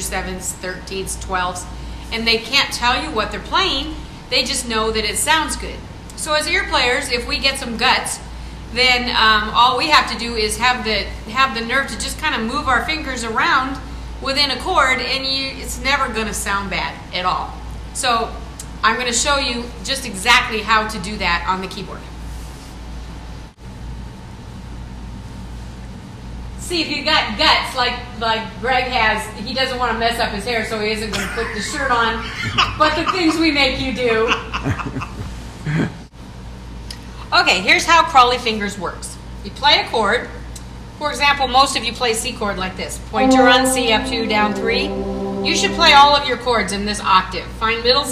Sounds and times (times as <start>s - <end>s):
Female speech, woman speaking: 0.0s - 22.1s, 26.6s - 34.6s, 37.2s - 40.4s, 41.0s - 48.1s.